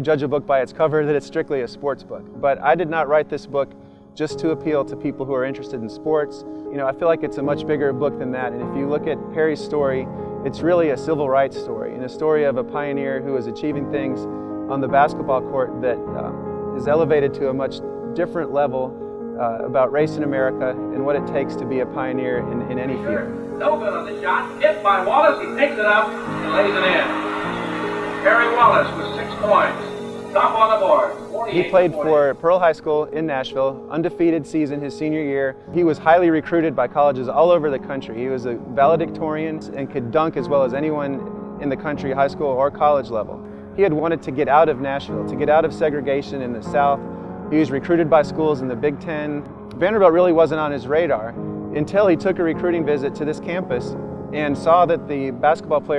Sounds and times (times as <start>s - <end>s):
Speech: 0.0s - 27.2s, 28.2s - 55.9s
Music: 0.0s - 55.9s.